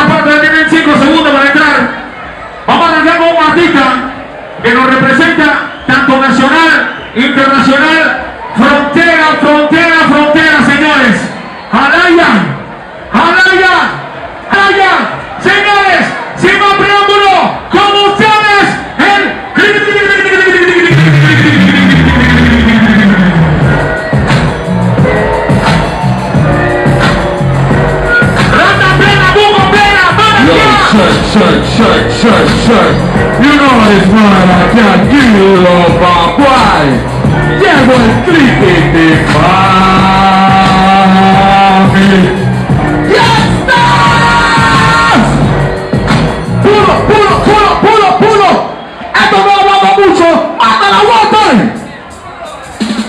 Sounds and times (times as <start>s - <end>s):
Speech: 0.0s - 2.0s, 2.7s - 12.6s, 13.2s - 21.8s, 28.5s - 37.0s, 37.6s - 42.4s, 46.6s - 52.6s.